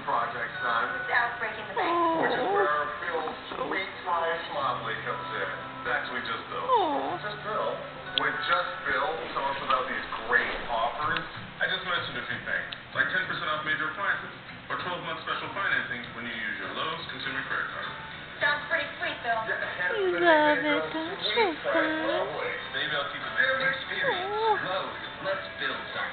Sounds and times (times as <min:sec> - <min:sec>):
Speech: 0:08.2 - 0:26.1.